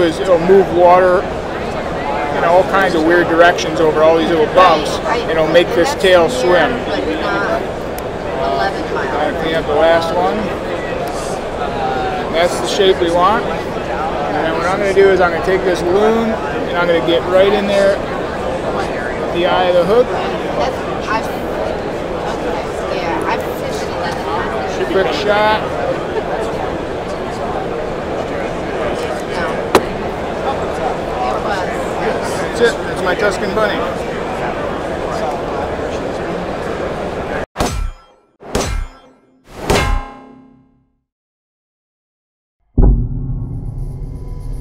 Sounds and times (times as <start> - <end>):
Clang: 39.7 - 40.6.